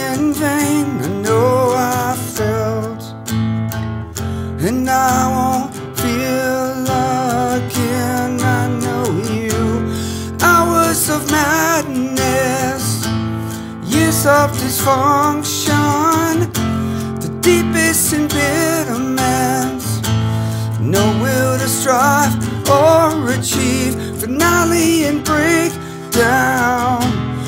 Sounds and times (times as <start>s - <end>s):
Music: 0.0s - 27.4s.